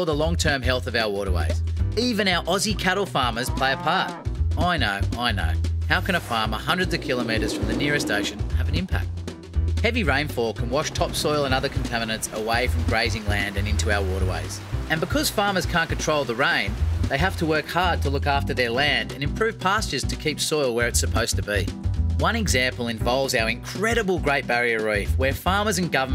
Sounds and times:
Speech: 0.0 - 9.1, 9.8 - 26.1
Music: 0.0 - 26.1.

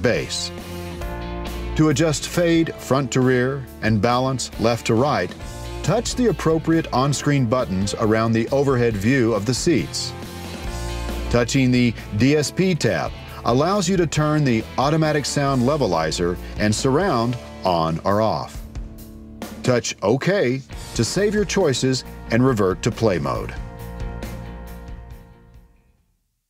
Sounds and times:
Speech: 0.0 - 0.6, 1.8 - 10.1, 11.3 - 18.6, 19.6 - 23.6
Music: 0.0 - 26.5.

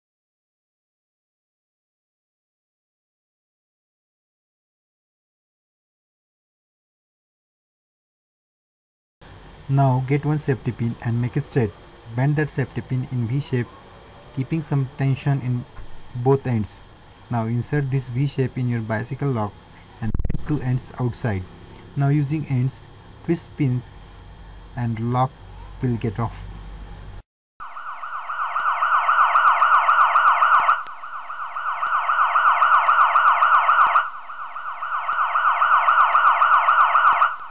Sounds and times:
Speech: 9.7 - 13.8, 14.4 - 23.9, 24.8 - 26.5.

